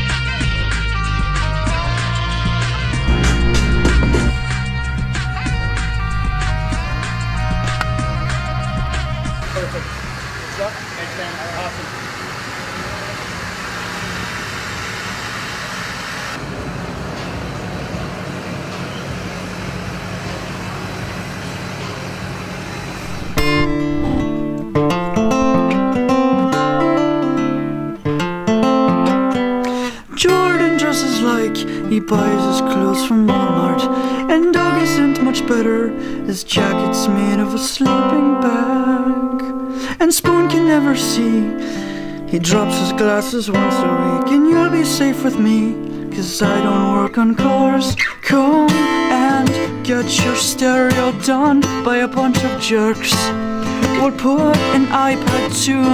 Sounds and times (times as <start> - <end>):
Truck: 0.0 - 25.9, 29.6 - 36.6, 39.5 - 55.9
Outside, urban or manmade: 0.0 - 55.9.